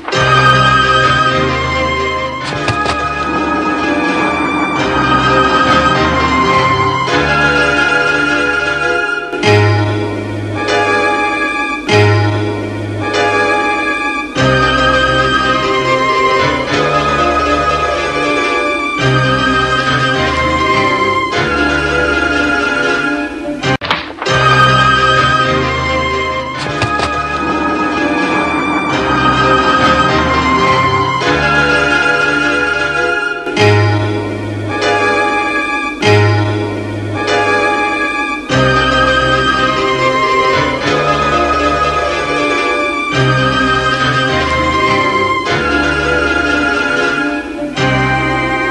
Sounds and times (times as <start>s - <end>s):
Music: 0.0s - 48.7s.